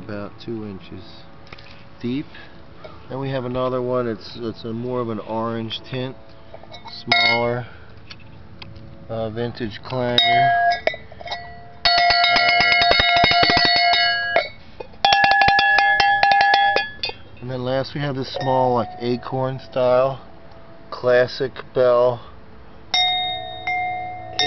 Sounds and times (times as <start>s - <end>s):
Cowbell: 6.8s - 7.6s, 10.2s - 17.4s, 18.3s - 19.3s, 22.9s - 24.4s.